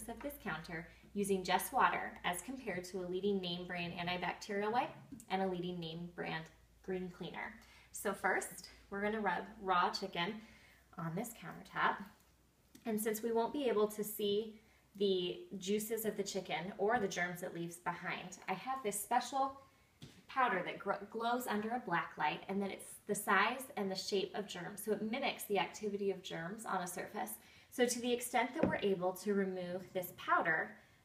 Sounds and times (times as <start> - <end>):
Speech: 0.0 - 10.4, 11.0 - 12.2, 12.8 - 19.6, 20.3 - 30.8.